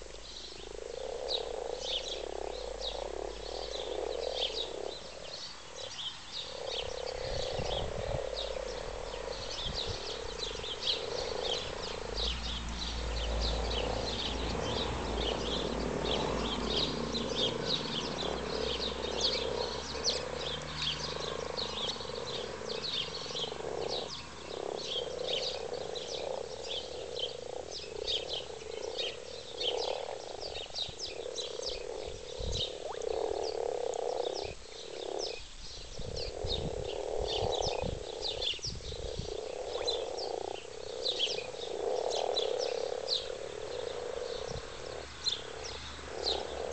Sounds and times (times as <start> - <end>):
Frog: 0.0 - 46.7.